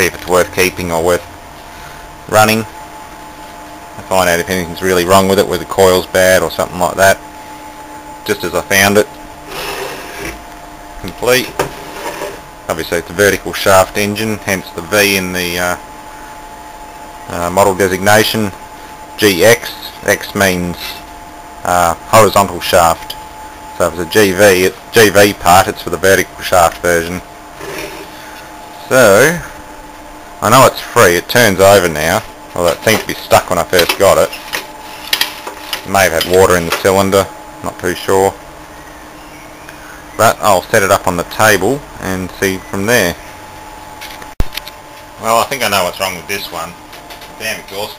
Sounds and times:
Speech: 0:00.0 - 0:01.2, 0:02.3 - 0:02.7, 0:04.0 - 0:07.2, 0:08.2 - 0:09.1, 0:11.0 - 0:11.6, 0:12.7 - 0:15.8, 0:17.3 - 0:18.6, 0:19.2 - 0:21.0, 0:21.6 - 0:23.1, 0:23.8 - 0:27.2, 0:28.8 - 0:29.5, 0:30.4 - 0:34.4, 0:35.8 - 0:38.4, 0:40.2 - 0:43.2, 0:45.2 - 0:46.8, 0:47.4 - 0:47.9.

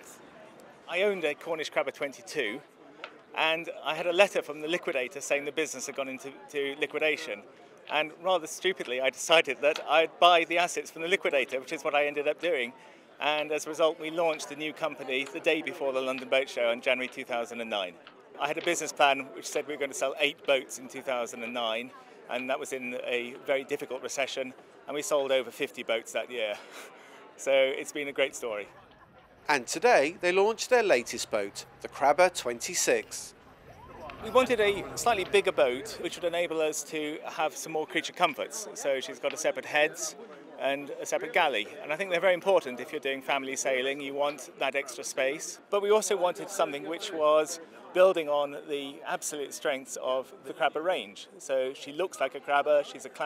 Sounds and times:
Speech: 0:00.8 - 0:02.7, 0:03.4 - 0:26.6, 0:27.4 - 0:28.8, 0:29.4 - 0:33.4, 0:34.1 - 0:53.2.

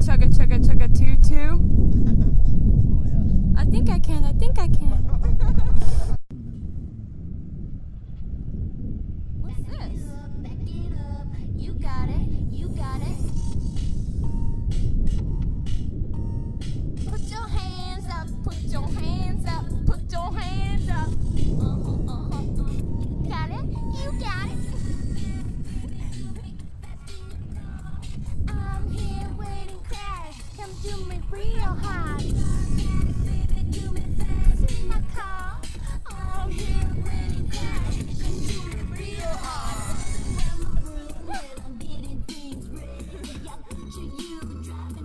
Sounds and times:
Speech: 0:00.0 - 0:01.6, 0:03.0 - 0:05.0, 0:09.4 - 0:10.9
Music: 0:10.4 - 0:45.0.

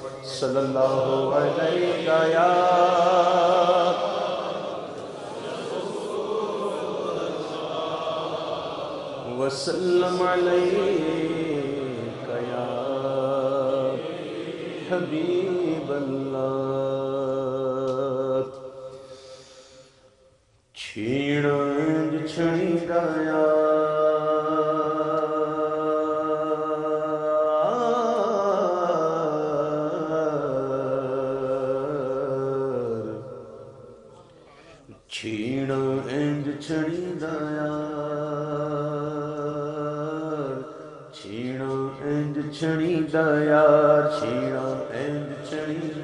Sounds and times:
Chant: 0:00.0 - 0:46.0.

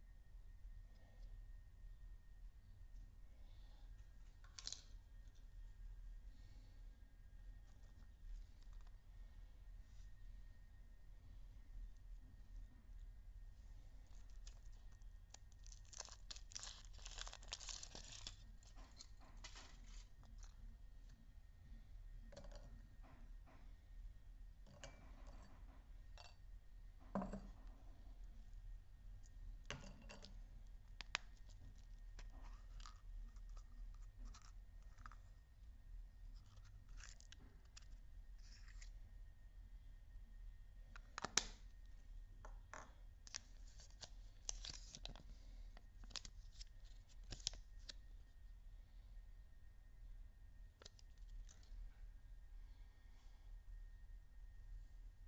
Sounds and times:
Inside, small room: 0:00.0 - 0:55.2.

